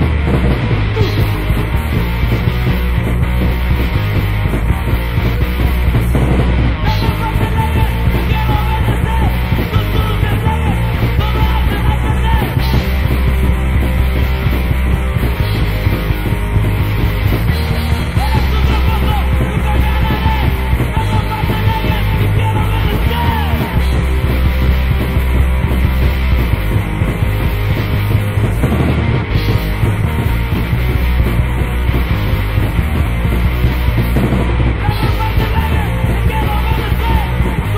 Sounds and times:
Punk rock: 0.0 - 37.7.

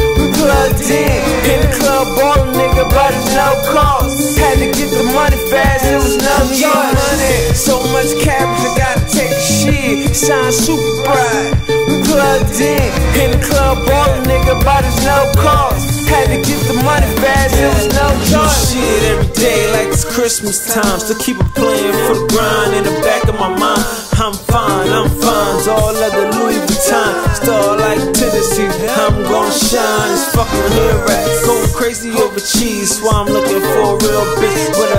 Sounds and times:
Music: 0.0 - 34.9.

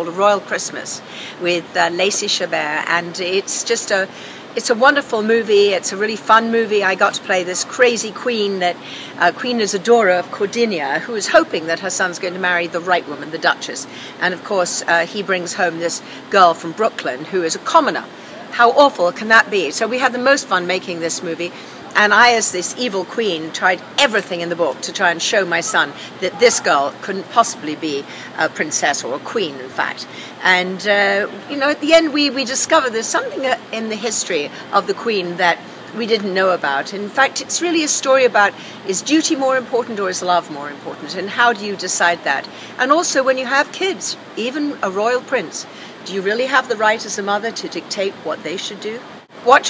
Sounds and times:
Speech: 0.0 - 49.6.

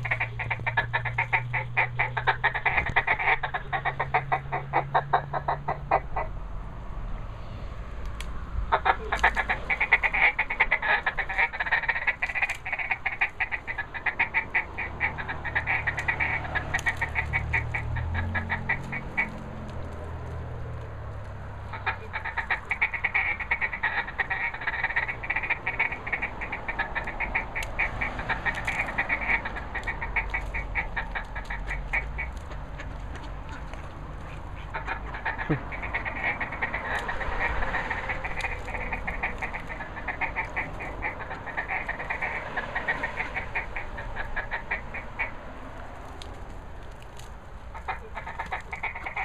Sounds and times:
Quack: 0.0 - 6.4, 8.7 - 20.1, 21.7 - 46.3, 46.9 - 49.2.

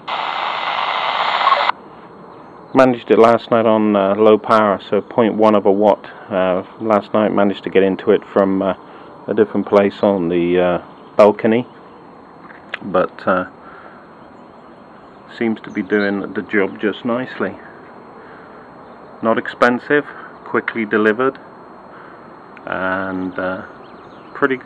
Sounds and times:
Outside, urban or manmade: 0.0 - 24.6
Speech: 2.7 - 11.8, 12.8 - 13.6, 15.3 - 17.8, 19.2 - 21.5, 22.6 - 23.7, 24.3 - 24.6.

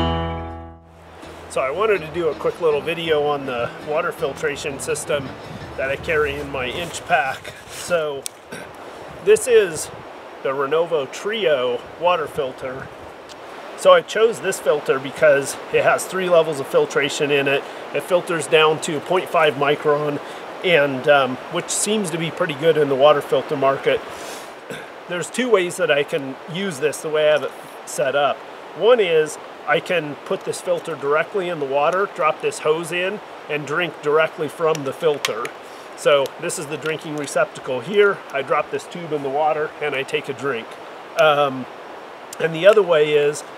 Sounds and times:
Speech: 1.5 - 8.2, 9.3 - 12.9, 13.8 - 24.0, 24.7 - 41.7, 42.4 - 43.5.

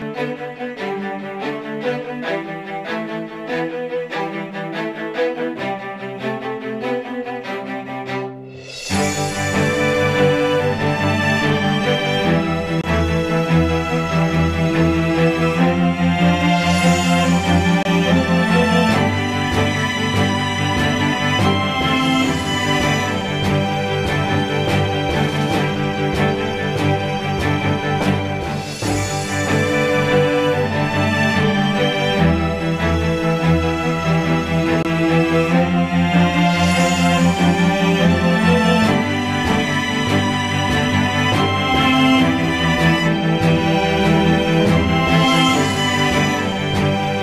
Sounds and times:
Music: 0.0 - 47.2.

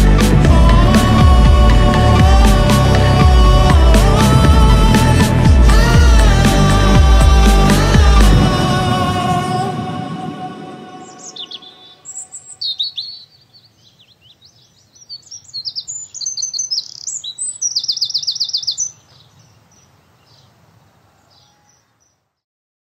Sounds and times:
Outside, rural or natural: 0.0 - 22.4
Chirp, tweet: 11.1 - 20.6, 21.2 - 22.4.

